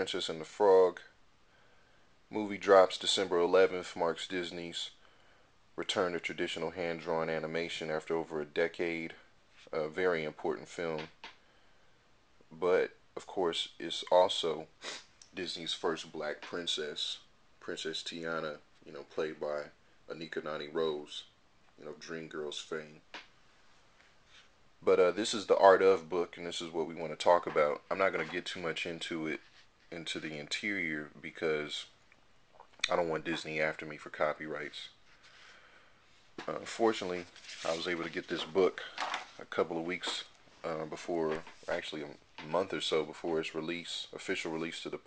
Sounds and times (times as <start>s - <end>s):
Speech: 0.0s - 1.2s, 2.3s - 5.0s, 5.8s - 11.1s, 12.5s - 23.0s, 24.8s - 32.0s, 32.8s - 35.0s, 36.4s - 45.0s.